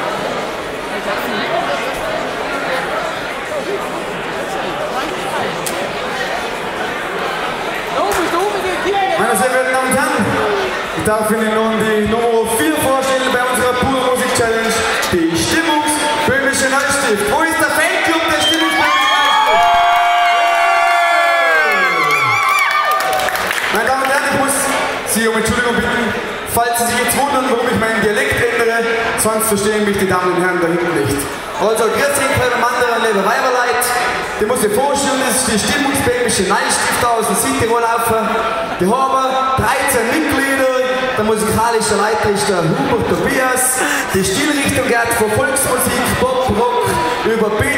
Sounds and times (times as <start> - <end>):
Speech: 7.9 - 19.1, 23.7 - 47.7.